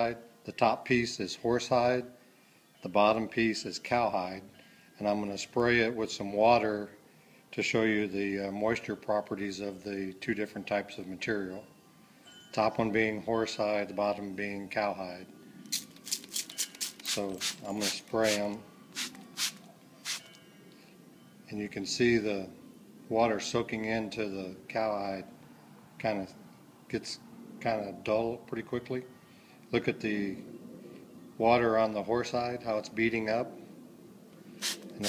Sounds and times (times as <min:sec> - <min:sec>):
Speech: 0:00.0 - 0:02.1, 0:02.9 - 0:07.0, 0:07.6 - 0:11.6, 0:12.6 - 0:15.3, 0:17.2 - 0:18.7, 0:21.5 - 0:25.3, 0:26.0 - 0:29.1, 0:29.7 - 0:30.4, 0:31.4 - 0:33.6.